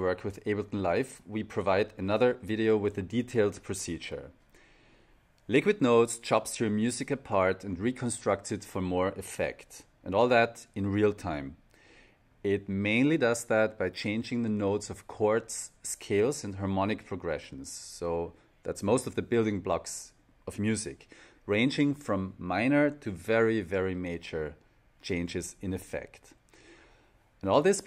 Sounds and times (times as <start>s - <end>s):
Speech: 0.0s - 4.4s, 5.5s - 11.6s, 12.4s - 26.4s, 27.4s - 27.8s.